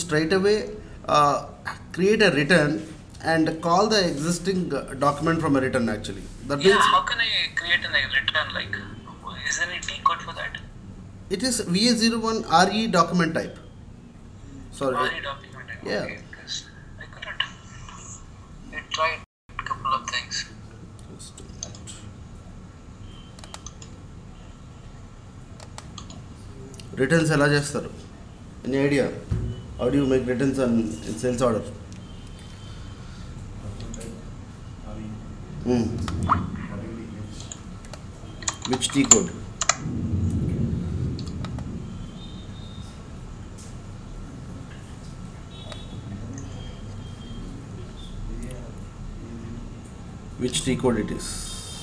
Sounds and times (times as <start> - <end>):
Computer keyboard: 23.4 - 23.9, 25.6 - 26.2, 37.5 - 39.8.